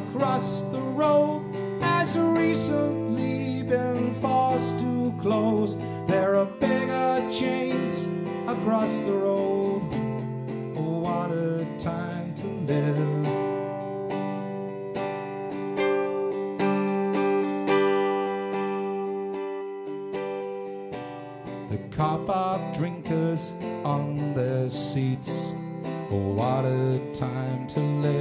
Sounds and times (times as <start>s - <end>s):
Strum: 0.0s - 28.2s.